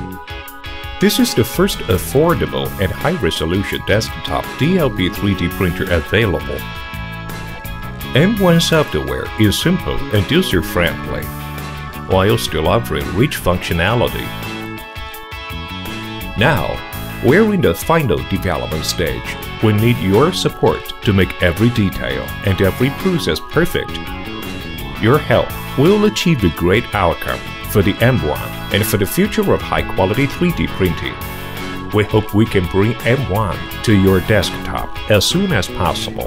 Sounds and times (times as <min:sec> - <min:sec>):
Music: 0:00.0 - 0:36.2
Speech: 0:01.0 - 0:06.6, 0:08.2 - 0:11.3, 0:12.1 - 0:14.4, 0:16.3 - 0:24.0, 0:25.0 - 0:31.2, 0:31.9 - 0:36.2.